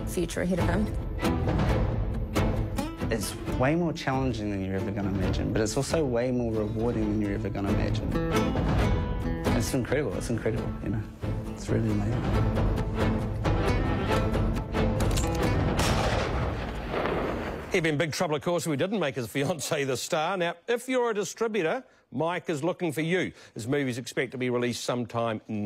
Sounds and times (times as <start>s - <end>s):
Fireworks: 15.8s - 17.9s.